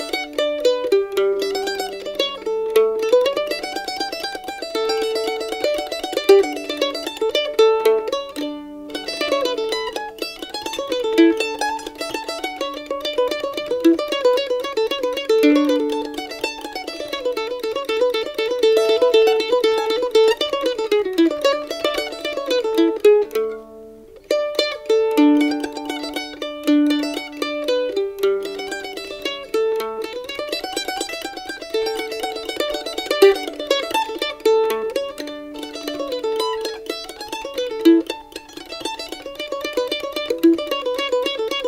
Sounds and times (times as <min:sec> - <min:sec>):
Mandolin: 0:00.0 - 0:41.6.